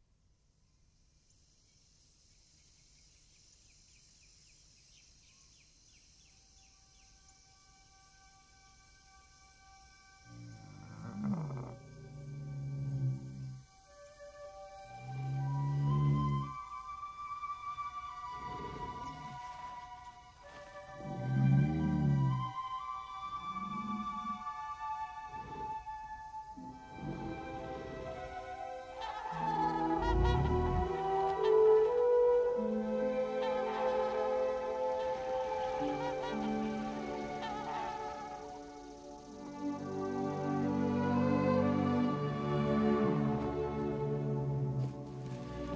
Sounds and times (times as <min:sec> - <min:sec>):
Outside, rural or natural: 0:00.0 - 0:45.7
Music: 0:06.3 - 0:45.7.